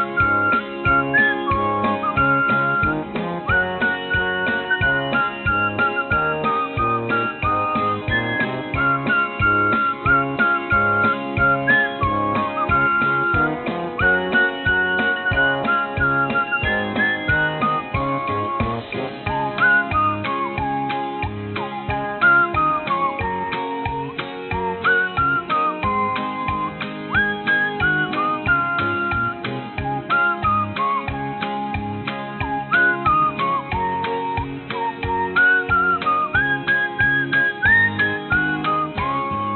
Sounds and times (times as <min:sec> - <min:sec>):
Music: 0:00.0 - 0:39.5
Whistling: 0:00.0 - 0:39.5.